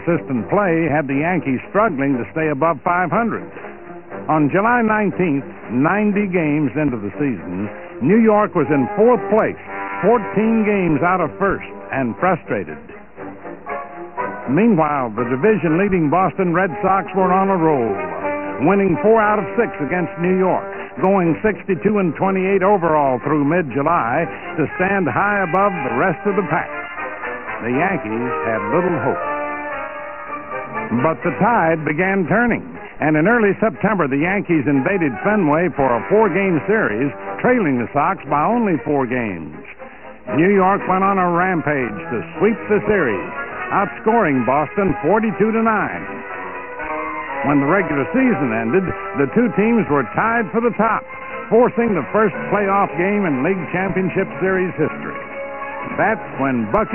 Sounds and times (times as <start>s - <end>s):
Speech: 0.0s - 3.5s, 4.3s - 12.8s, 14.5s - 18.0s, 18.6s - 26.7s, 27.6s - 29.2s, 30.9s - 46.2s, 47.4s - 55.2s, 55.9s - 56.9s
Music: 0.0s - 56.9s.